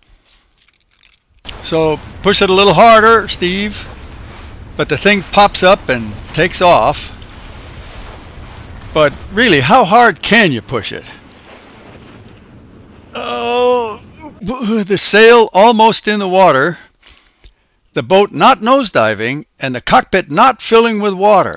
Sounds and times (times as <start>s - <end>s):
Rustling leaves: 0.0s - 15.7s
Speech: 1.6s - 3.9s, 4.8s - 7.2s, 9.0s - 11.2s, 13.2s - 16.9s, 18.0s - 21.5s.